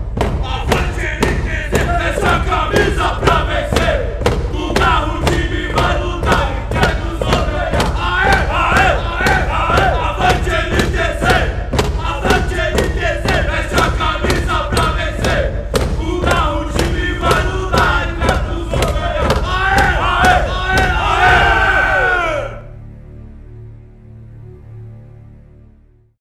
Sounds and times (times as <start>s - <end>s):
Crowd: 0.0s - 22.7s
Battle cry: 0.4s - 22.7s.